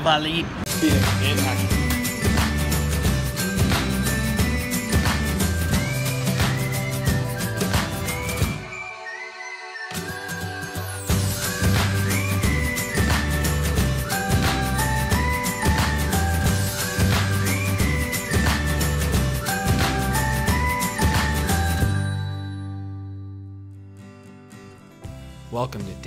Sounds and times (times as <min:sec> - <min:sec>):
Music: 0:00.7 - 0:26.0.